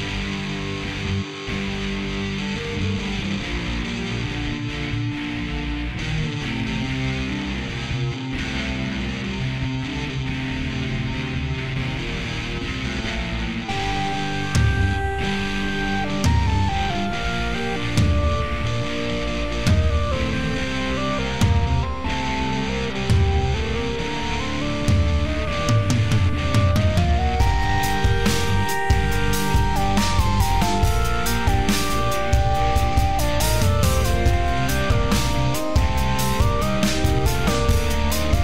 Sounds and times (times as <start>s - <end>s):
Music: 0.0s - 38.4s.